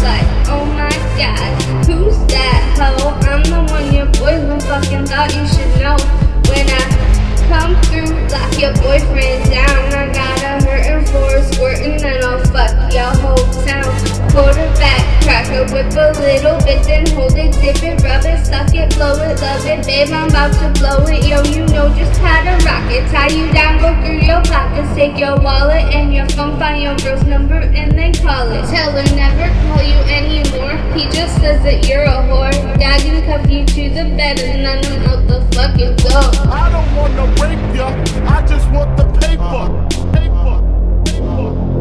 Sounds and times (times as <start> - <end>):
Music: 0.0 - 41.8.